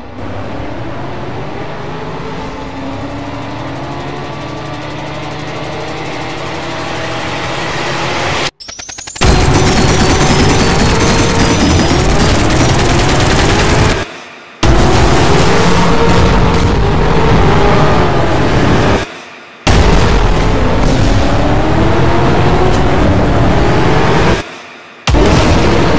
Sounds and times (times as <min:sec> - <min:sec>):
Fusillade: 0:08.7 - 0:14.1.